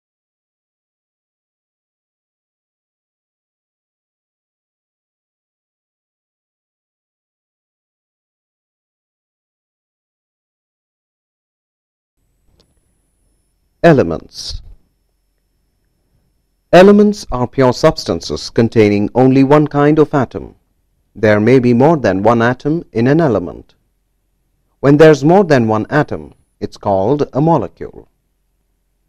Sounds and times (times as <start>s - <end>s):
Speech: 13.8s - 14.8s, 16.8s - 20.6s, 21.2s - 23.7s, 24.8s - 28.1s.